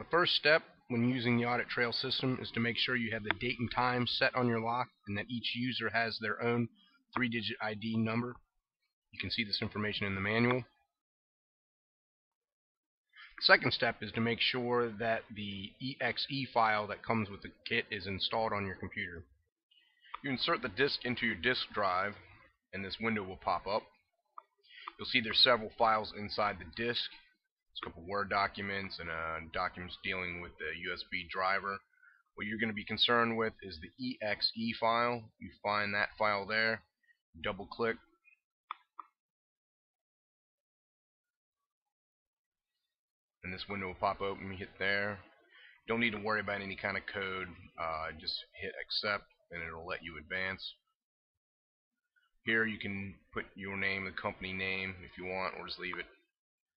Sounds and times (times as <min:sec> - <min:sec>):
Speech: 0:00.0 - 0:10.9, 0:13.3 - 0:19.3, 0:19.9 - 0:24.1, 0:24.7 - 0:38.4, 0:43.4 - 0:51.0, 0:52.4 - 0:56.3.